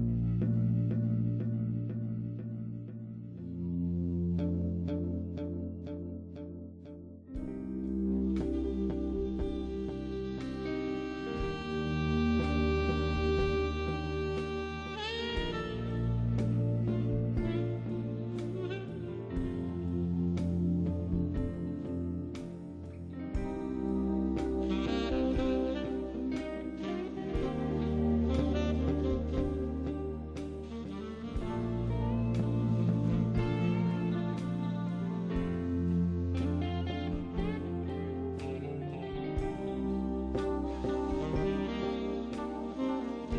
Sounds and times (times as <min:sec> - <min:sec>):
Music: 0:00.0 - 0:43.3.